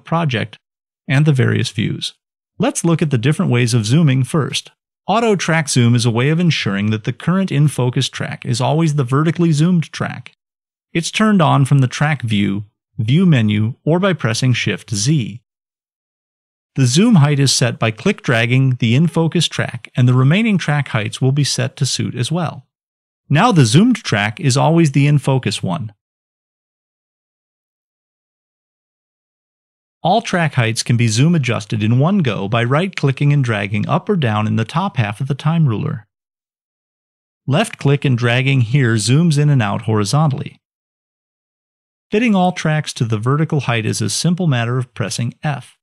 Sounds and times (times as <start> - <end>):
Speech: 0.0 - 15.5, 16.8 - 22.7, 23.3 - 26.0, 30.0 - 36.2, 37.5 - 40.7, 42.1 - 45.8.